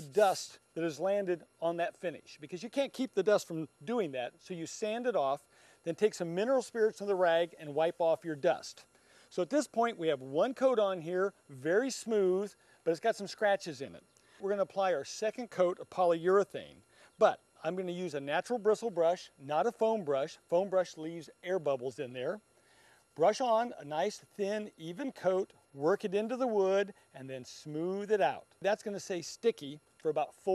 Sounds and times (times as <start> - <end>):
Speech: 0.0 - 22.4, 23.2 - 30.5.